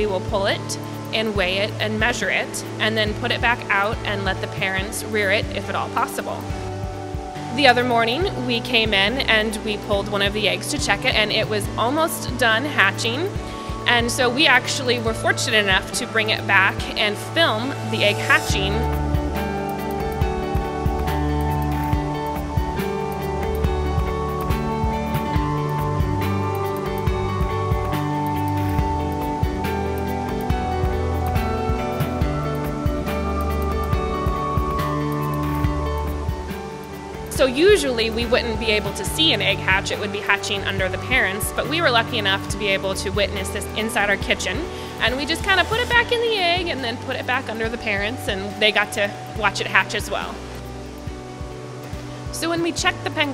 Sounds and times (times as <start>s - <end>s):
Speech: 0.0s - 6.4s, 7.5s - 18.9s, 37.3s - 50.4s, 52.4s - 53.3s
Music: 0.0s - 53.3s.